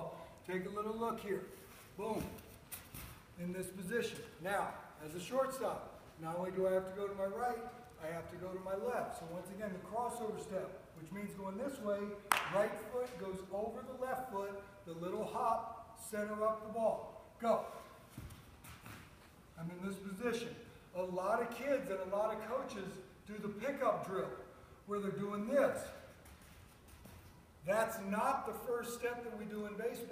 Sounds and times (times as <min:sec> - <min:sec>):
Speech: 0:00.0 - 0:02.4, 0:03.4 - 0:17.8, 0:19.6 - 0:26.0, 0:27.6 - 0:30.1.